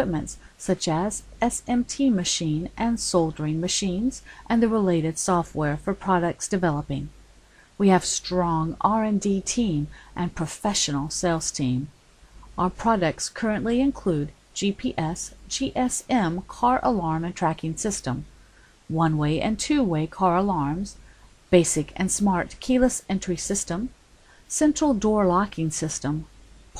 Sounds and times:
Speech: 0:00.0 - 0:07.1, 0:07.8 - 0:11.9, 0:12.6 - 0:18.3, 0:18.9 - 0:26.7.

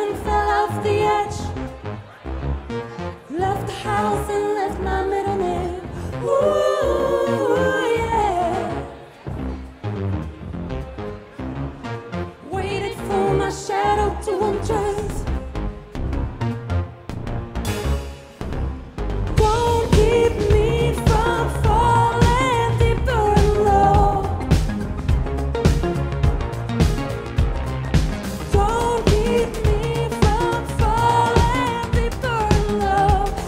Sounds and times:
Music: 0:00.0 - 0:33.4.

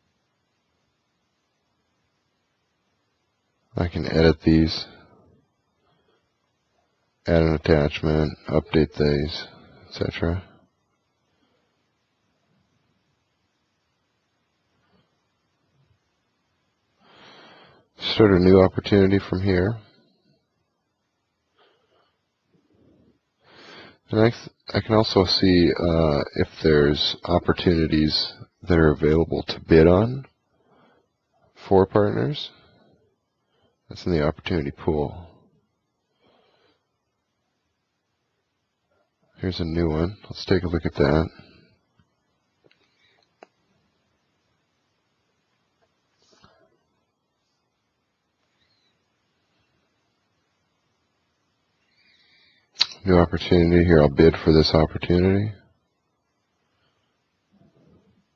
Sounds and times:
Speech: 0:03.7 - 0:05.1, 0:07.3 - 0:10.6, 0:18.0 - 0:20.0, 0:24.0 - 0:30.4, 0:31.5 - 0:32.6, 0:33.9 - 0:35.4, 0:39.4 - 0:41.6, 0:52.8 - 0:55.7.

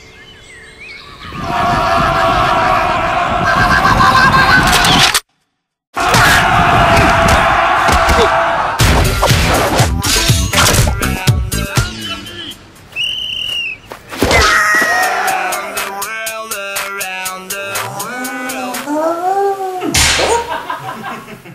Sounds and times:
Music: 0:08.8 - 0:12.6, 0:15.0 - 0:18.9.

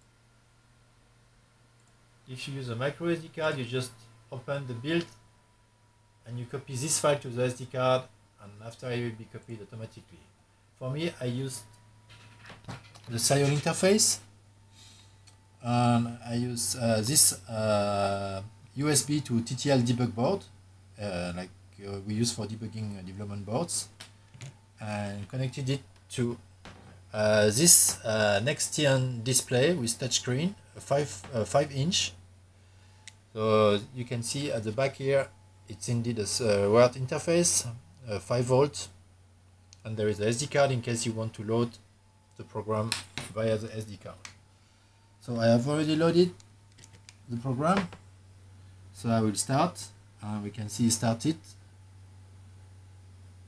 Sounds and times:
Speech: 0:02.3 - 0:05.2, 0:06.3 - 0:11.7, 0:13.1 - 0:14.3, 0:15.6 - 0:24.0, 0:24.8 - 0:26.4, 0:27.1 - 0:32.2, 0:33.4 - 0:39.0, 0:39.8 - 0:41.8, 0:42.4 - 0:44.3, 0:45.2 - 0:46.4, 0:47.3 - 0:48.0, 0:49.0 - 0:51.6.

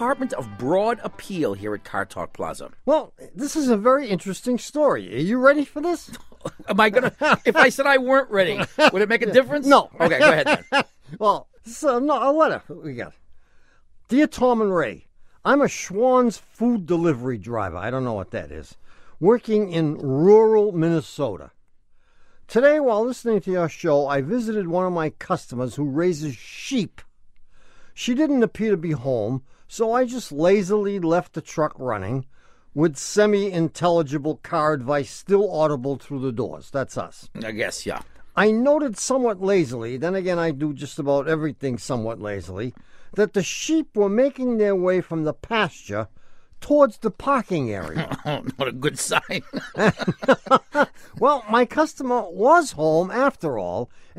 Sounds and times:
Speech: 0:00.0 - 0:13.2, 0:14.1 - 0:21.5, 0:22.5 - 0:27.1, 0:28.0 - 0:54.1.

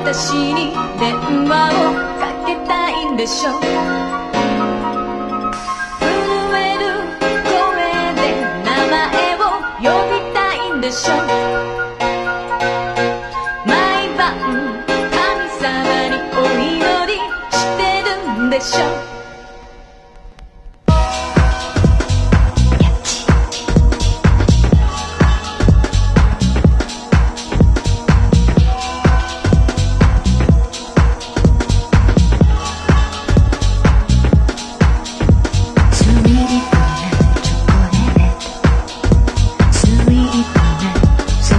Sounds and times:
Musical instrument: 0:00.0 - 0:41.5.

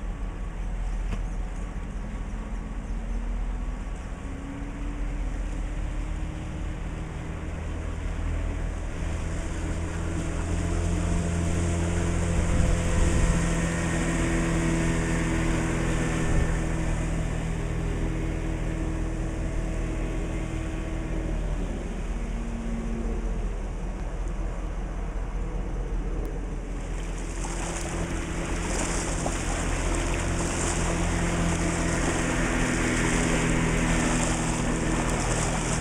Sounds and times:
Motorboat, speedboat: 0:00.0 - 0:35.8.

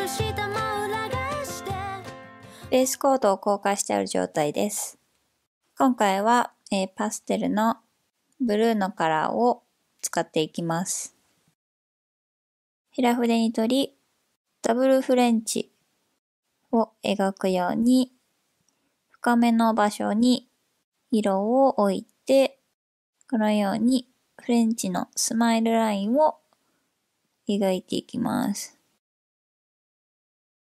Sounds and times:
Speech: 0:02.7 - 0:05.0, 0:05.8 - 0:07.8, 0:08.4 - 0:11.2, 0:13.0 - 0:14.0, 0:14.6 - 0:15.7, 0:16.7 - 0:18.2, 0:19.2 - 0:20.5, 0:21.1 - 0:22.6, 0:23.3 - 0:26.4, 0:27.5 - 0:28.8.

